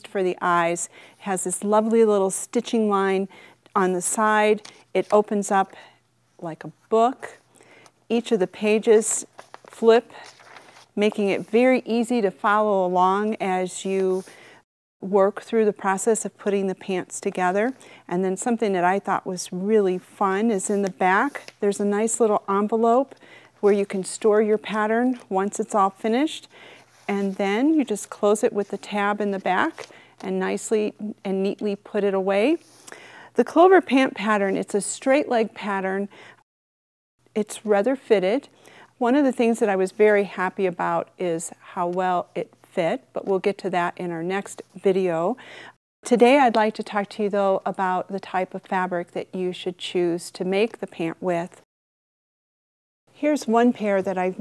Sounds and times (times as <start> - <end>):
Speech: 0.0 - 5.8, 6.4 - 7.4, 8.1 - 10.2, 11.0 - 14.3, 15.0 - 26.5, 27.1 - 32.6, 33.4 - 36.1, 37.4 - 45.4, 46.1 - 51.6, 53.2 - 54.4.